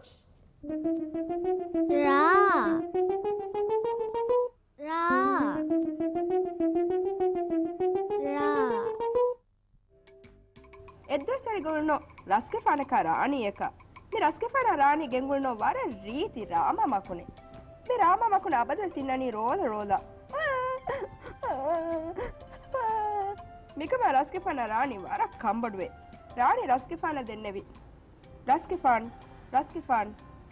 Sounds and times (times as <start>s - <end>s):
Inside, small room: 0.0s - 30.5s
Music: 0.6s - 30.5s
Child speech, kid speaking: 1.9s - 2.8s, 4.8s - 5.6s, 8.2s - 8.9s.